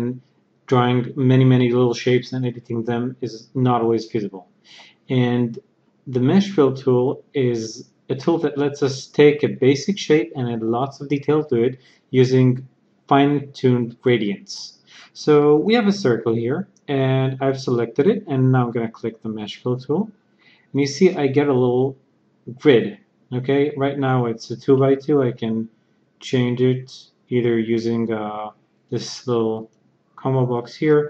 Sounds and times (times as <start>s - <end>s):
Speech: 0.0s - 20.1s, 20.8s - 31.1s.